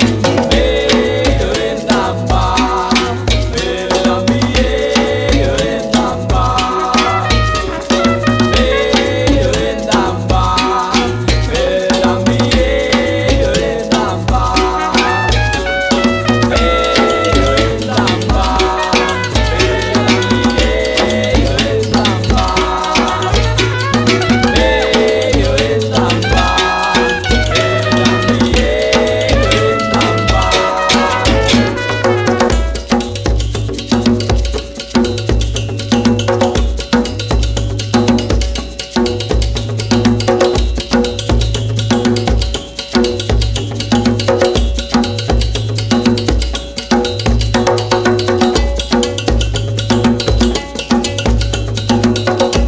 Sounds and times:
Drum: 0:00.0 - 0:52.6
Rattle (instrument): 0:00.0 - 0:52.6
Trumpet: 0:07.0 - 0:09.6, 0:14.7 - 0:21.2, 0:22.1 - 0:25.4, 0:26.1 - 0:33.3.

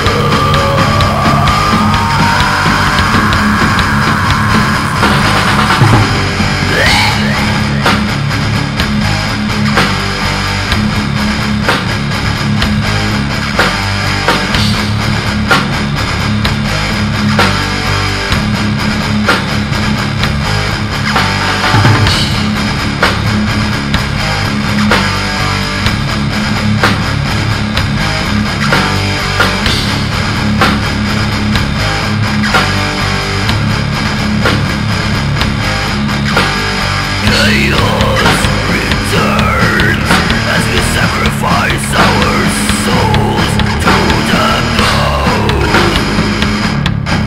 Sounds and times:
Music: 0:00.0 - 0:47.2.

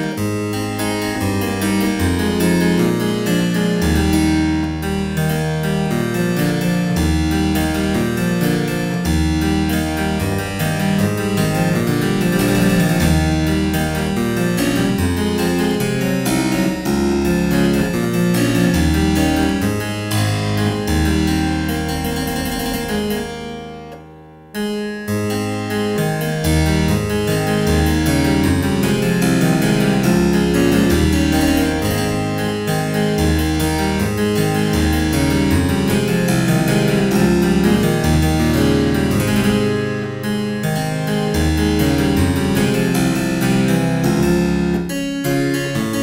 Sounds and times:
Harpsichord: 0:00.0 - 0:46.0.

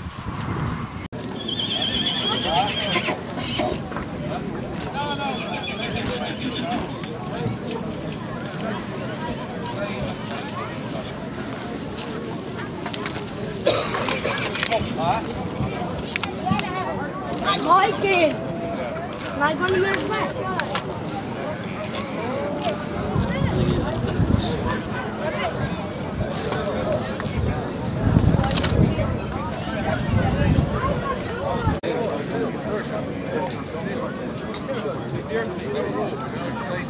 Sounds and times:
Neigh, whinny: 0:01.4 - 0:03.8, 0:05.3 - 0:06.8
Speech: 0:01.6 - 0:36.9.

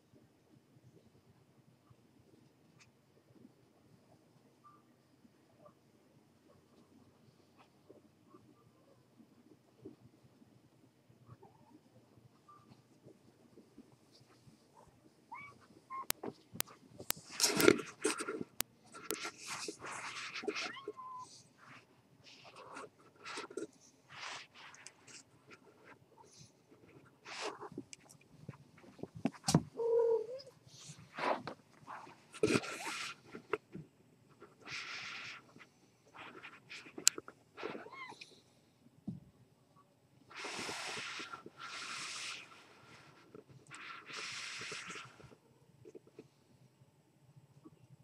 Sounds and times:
Cat: 0:11.2 - 0:12.8, 0:14.7 - 0:16.7, 0:17.5 - 0:21.8, 0:29.7 - 0:33.5, 0:37.6 - 0:38.4.

